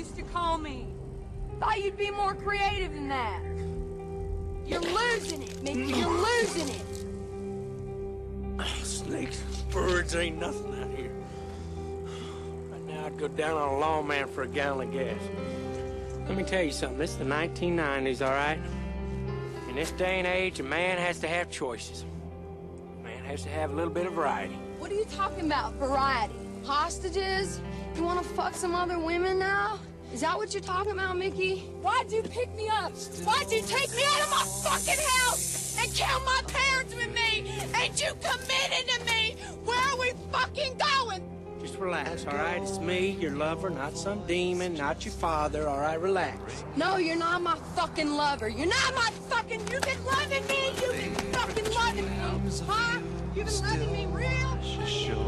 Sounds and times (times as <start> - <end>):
Music: 0.0 - 55.2.